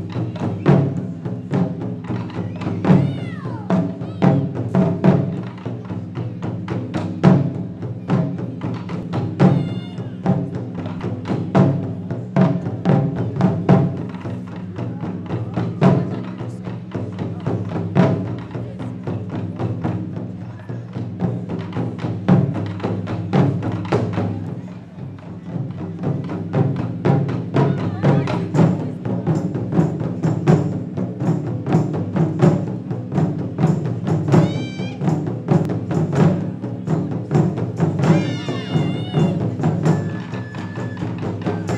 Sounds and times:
Drum: 0.0 - 41.7.

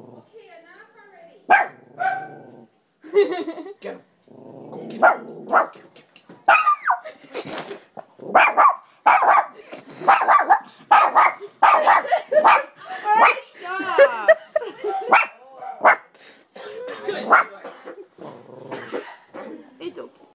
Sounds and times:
Bow-wow: 1.5 - 2.6, 5.0 - 5.8, 6.5 - 7.0, 8.3 - 13.4, 15.1 - 16.1, 17.3 - 17.6.

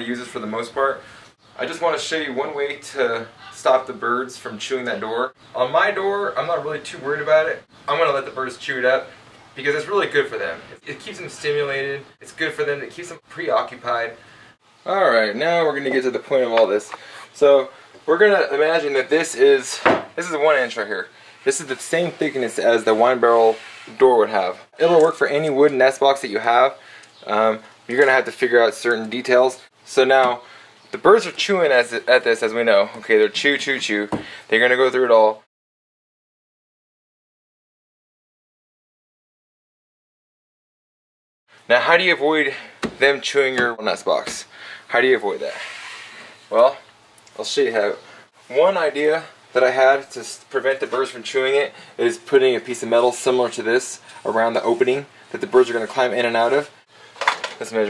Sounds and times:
Speech: 0.0 - 1.0, 1.6 - 14.2, 14.8 - 35.5, 41.7 - 45.7, 46.5 - 56.8, 57.5 - 57.8.

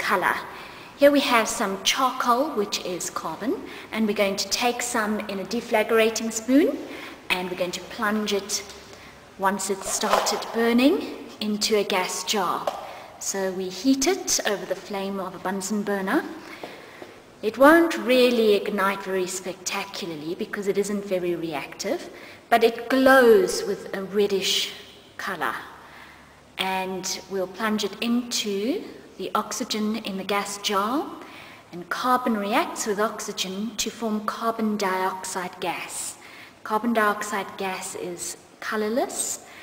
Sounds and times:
Speech: 0.0 - 8.8, 9.4 - 16.4, 17.4 - 25.8, 26.6 - 39.5.

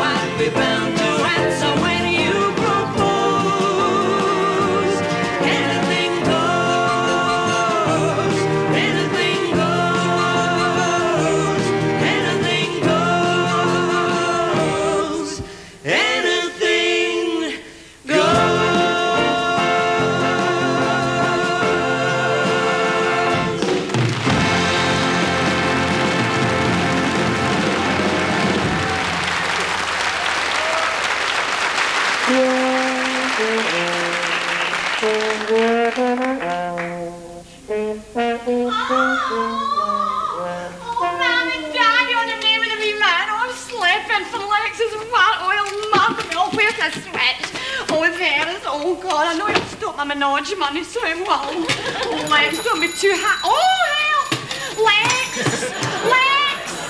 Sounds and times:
Trombone: 0.0 - 15.2, 18.1 - 29.8, 32.1 - 42.0.

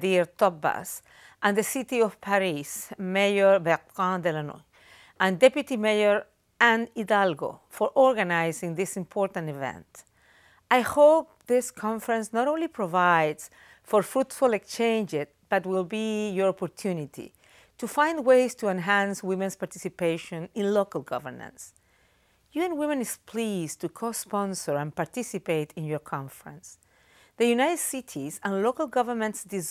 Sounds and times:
Female speech, woman speaking: 0.0 - 4.6, 5.2 - 10.0, 10.7 - 21.7, 22.6 - 26.8, 27.4 - 29.7
Narration, monologue: 0.0 - 29.7.

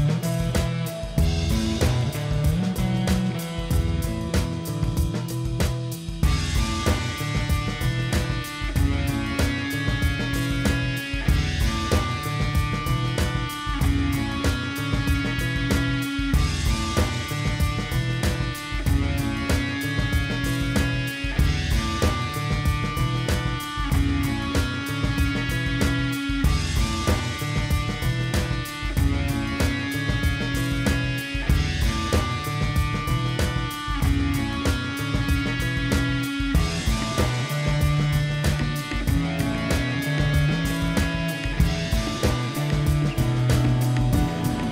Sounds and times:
Music: 0.0 - 44.7.

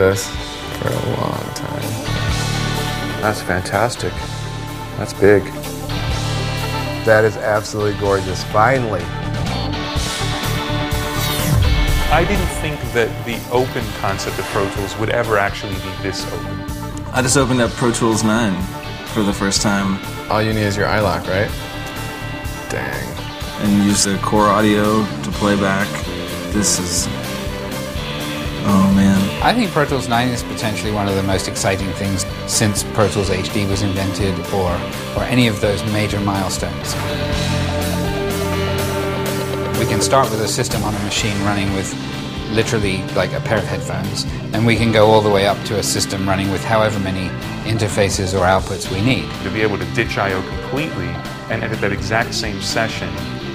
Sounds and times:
Speech: 0.0 - 2.0, 3.2 - 4.2, 5.0 - 5.6, 7.0 - 9.1, 12.1 - 21.6, 22.7 - 27.2, 28.6 - 37.1, 39.8 - 53.2
Music: 0.0 - 53.5.

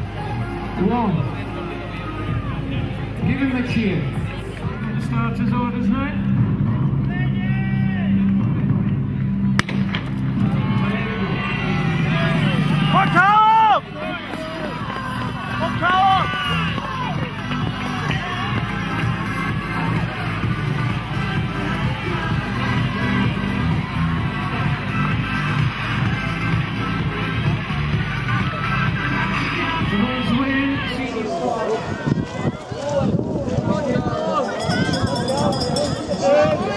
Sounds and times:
Run: 0.0 - 5.2, 6.4 - 36.7
Music: 0.0 - 36.7.

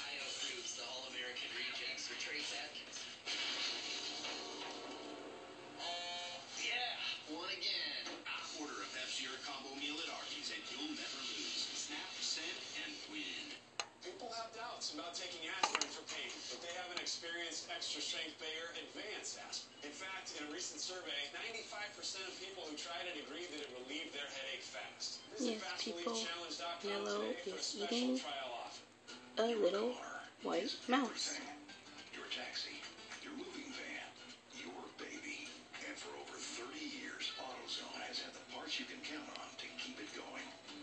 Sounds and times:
Speech: 6.6 - 28.3, 29.4 - 31.5, 33.5 - 40.5.

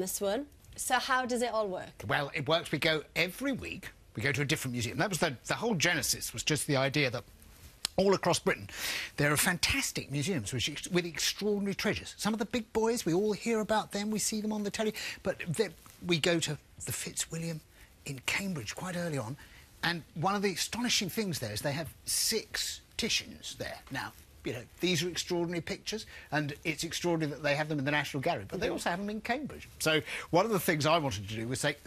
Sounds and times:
Speech: 7.9 - 31.8.

